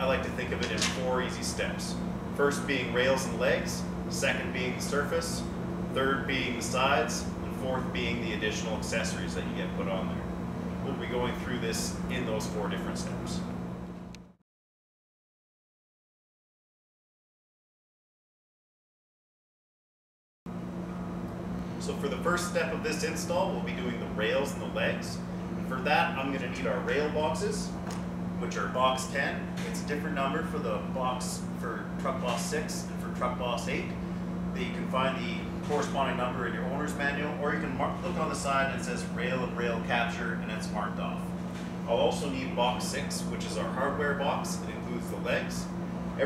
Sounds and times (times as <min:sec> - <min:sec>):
Speech: 0:00.0 - 0:13.5, 0:21.8 - 0:27.8, 0:28.4 - 0:41.3, 0:41.9 - 0:46.2.